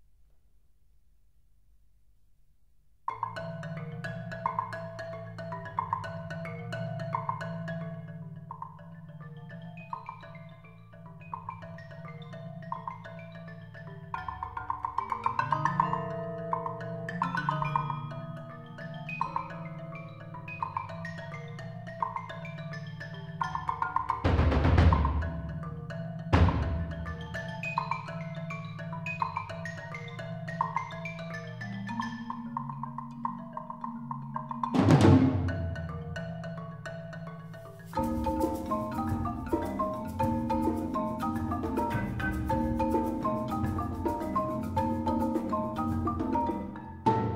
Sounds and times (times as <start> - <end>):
Percussion: 3.0 - 47.3.